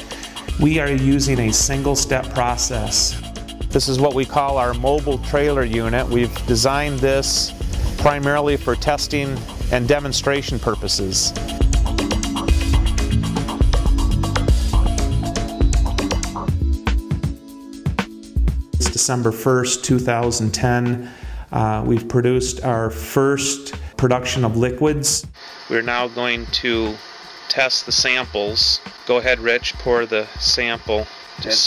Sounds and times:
Music: 0.0s - 31.6s
Speech: 0.6s - 11.4s, 18.8s - 31.6s.

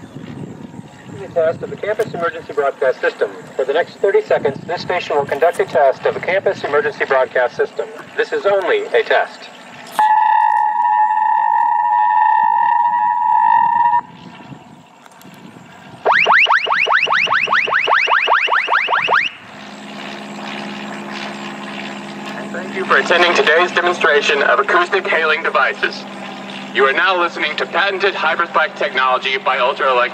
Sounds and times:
Vehicle: 0.0s - 30.1s
Speech: 1.2s - 9.5s, 22.3s - 26.0s, 26.8s - 30.1s.

